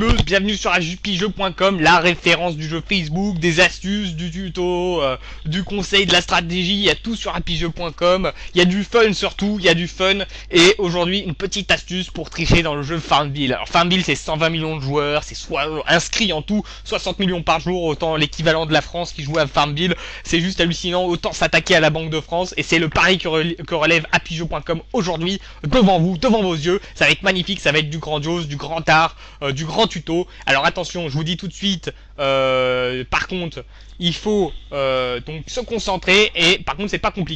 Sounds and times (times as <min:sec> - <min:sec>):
Speech: 0:00.0 - 0:37.3.